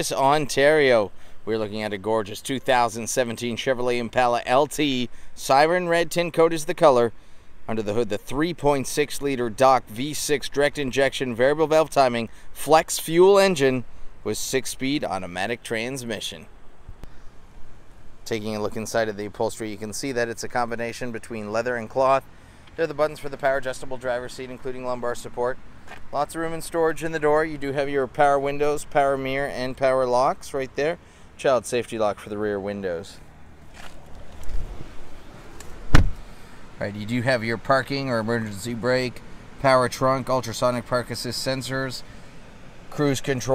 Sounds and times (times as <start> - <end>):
Speech: 0.0 - 16.5, 18.2 - 22.2, 22.8 - 33.2, 36.8 - 42.1, 42.9 - 43.5.